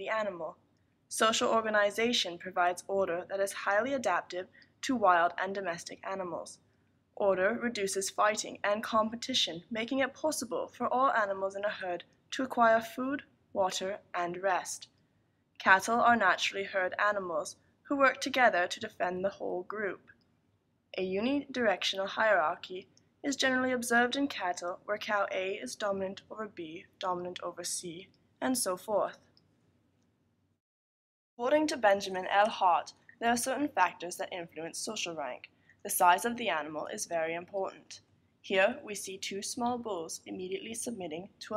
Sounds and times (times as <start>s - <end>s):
Speech: 0.0s - 6.6s, 7.2s - 14.9s, 15.6s - 20.1s, 21.0s - 29.2s, 31.4s - 41.5s.